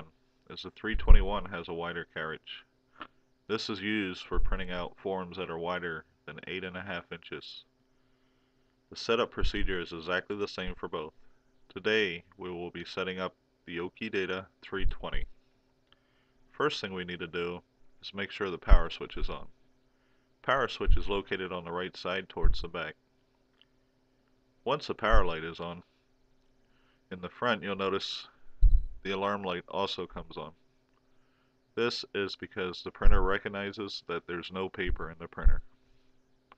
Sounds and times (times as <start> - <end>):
Speech: 0.0 - 2.7, 3.5 - 7.7, 8.9 - 15.4, 16.6 - 19.6, 20.4 - 23.0, 24.6 - 25.9, 27.1 - 28.4, 29.0 - 30.6, 31.8 - 35.7.